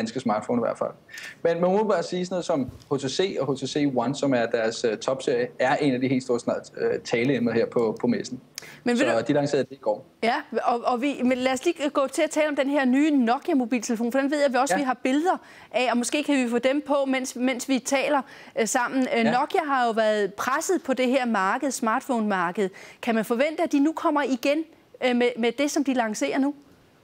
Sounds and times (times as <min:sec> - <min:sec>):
Speech: 0:05.1 - 0:10.4, 0:18.9 - 0:20.0.